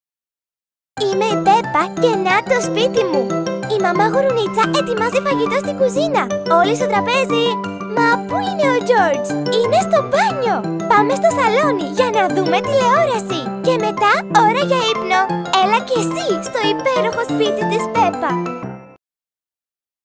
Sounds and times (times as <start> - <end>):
Speech: 1.0 - 18.4
Music: 1.0 - 19.0.